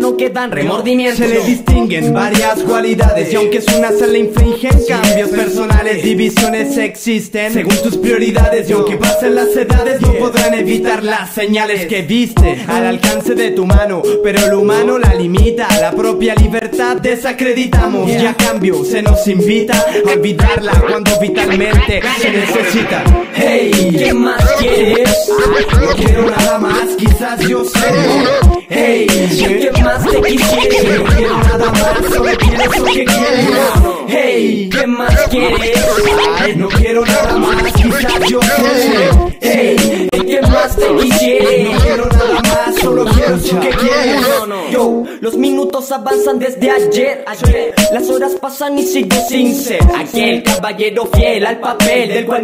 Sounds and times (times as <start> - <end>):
Hip hop music: 0.0 - 52.4
Rapping: 0.0 - 52.4.